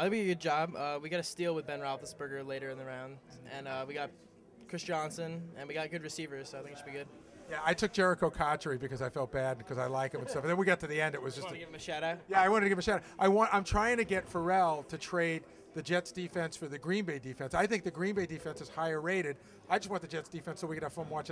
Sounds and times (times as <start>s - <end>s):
Speech: 0.0s - 4.1s, 4.7s - 21.3s.